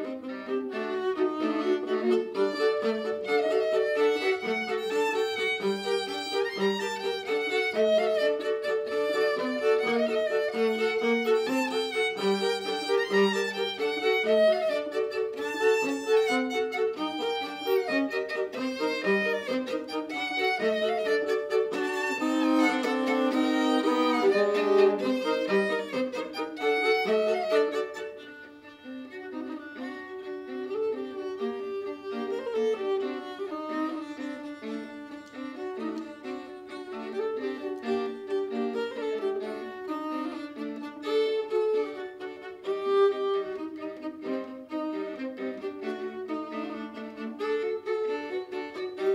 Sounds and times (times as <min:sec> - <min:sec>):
Violin, fiddle: 0:00.0 - 0:49.1.